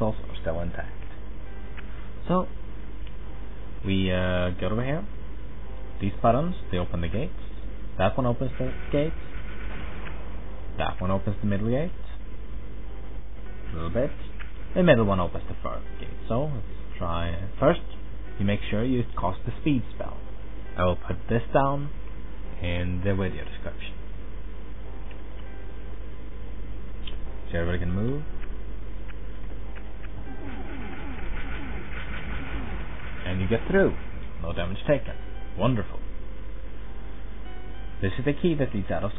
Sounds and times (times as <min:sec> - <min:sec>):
Speech: 0:00.0 - 0:01.0, 0:02.2 - 0:02.5, 0:03.8 - 0:05.1, 0:06.0 - 0:07.4, 0:08.0 - 0:09.2, 0:10.8 - 0:12.2, 0:13.7 - 0:20.2, 0:20.8 - 0:22.0, 0:22.6 - 0:24.0, 0:27.5 - 0:28.3, 0:33.2 - 0:36.0, 0:38.0 - 0:39.1.